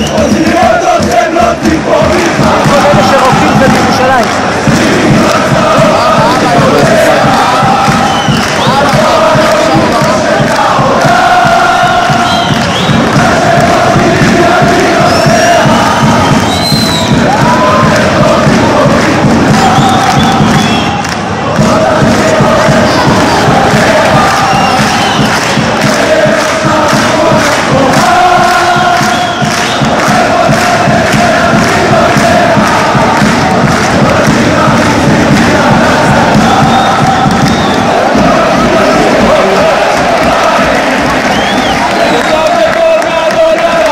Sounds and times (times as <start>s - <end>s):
Music: 0.0s - 43.9s.